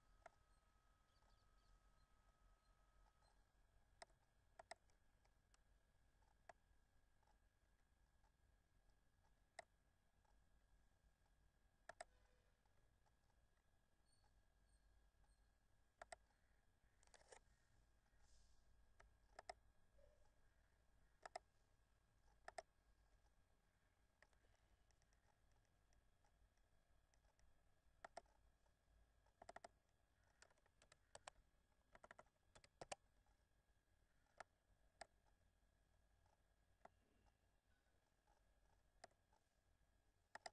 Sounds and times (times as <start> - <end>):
Clicking: 4.0 - 5.6, 11.9 - 13.2, 16.0 - 16.3, 17.0 - 17.4, 19.0 - 19.6, 21.2 - 21.5, 22.3 - 22.7, 24.2 - 33.0, 34.2 - 35.4, 39.0 - 39.4, 40.3 - 40.5.